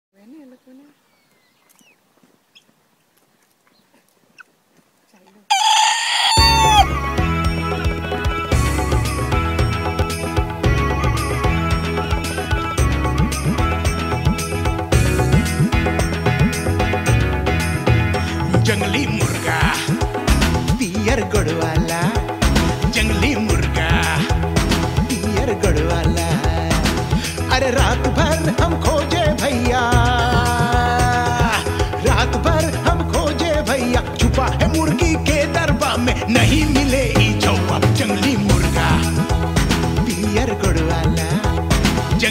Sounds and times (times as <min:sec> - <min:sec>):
Speech: 0:00.2 - 0:01.0, 0:05.1 - 0:05.5
Outside, rural or natural: 0:00.2 - 0:18.6
Bird: 0:00.3 - 0:02.8, 0:03.4 - 0:04.5
Chicken, rooster: 0:05.5 - 0:06.9
Music: 0:06.3 - 0:42.3.